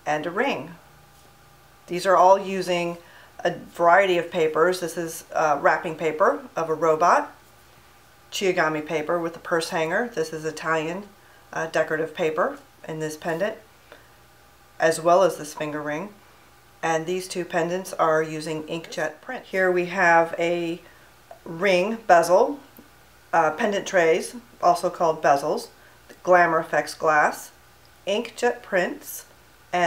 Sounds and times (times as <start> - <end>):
Speech: 0.0 - 0.8, 1.9 - 7.4, 8.3 - 13.6, 14.8 - 16.2, 16.8 - 22.7, 23.4 - 29.8.